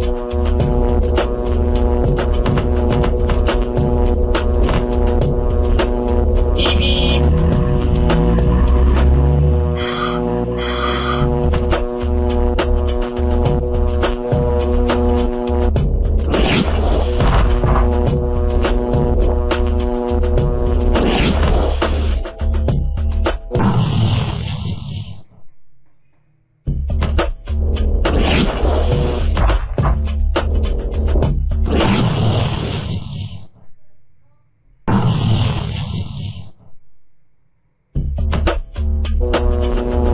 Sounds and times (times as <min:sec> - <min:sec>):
Music: 0:00.0 - 0:32.2, 0:37.8 - 0:40.1.